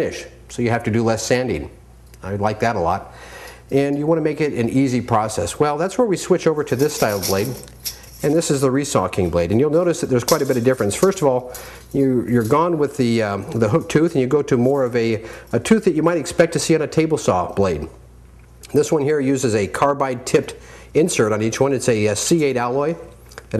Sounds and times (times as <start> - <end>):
Speech: 0.0 - 3.1, 3.7 - 18.0, 18.7 - 23.5.